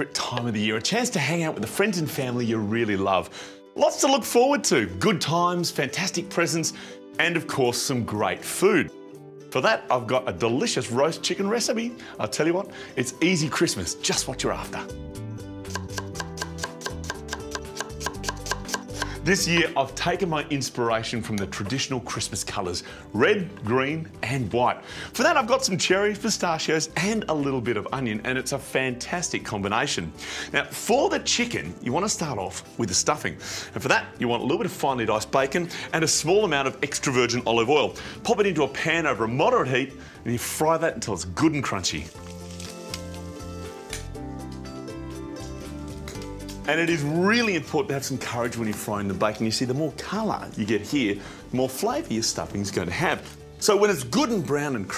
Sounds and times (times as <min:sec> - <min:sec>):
Speech: 0:00.0 - 0:08.9, 0:09.6 - 0:14.9, 0:19.3 - 0:42.1, 0:46.7 - 0:54.9
Music: 0:00.0 - 0:54.9.